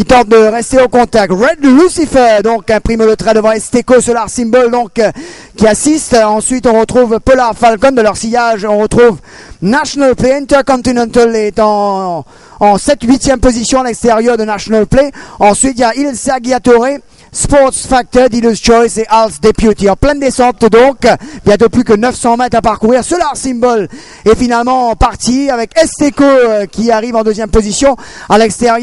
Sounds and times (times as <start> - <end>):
Speech: 0.0 - 28.8.